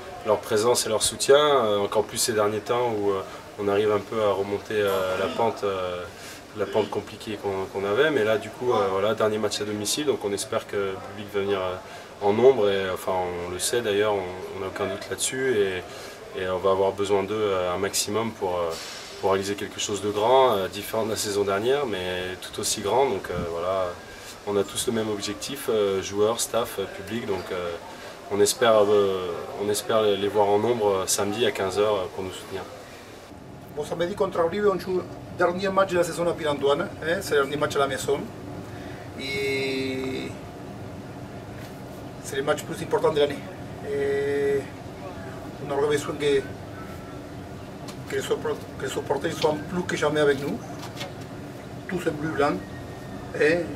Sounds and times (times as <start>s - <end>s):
Speech: 0.0s - 32.8s, 33.7s - 38.3s, 39.2s - 40.4s, 42.2s - 46.6s, 48.1s - 50.6s, 51.9s - 52.6s, 53.3s - 53.7s.